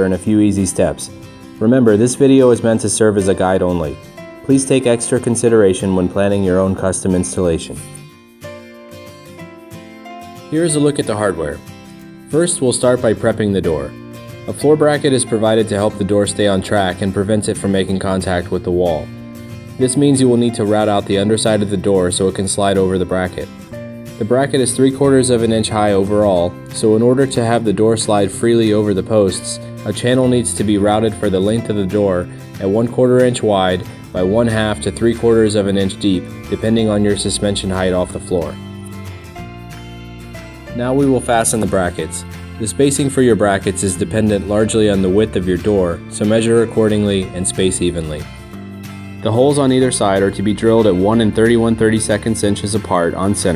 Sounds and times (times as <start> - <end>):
Speech: 0.0 - 8.0, 10.5 - 11.6, 12.3 - 19.1, 19.8 - 23.5, 24.2 - 38.6, 40.8 - 48.3, 49.2 - 53.5
Music: 0.0 - 53.5.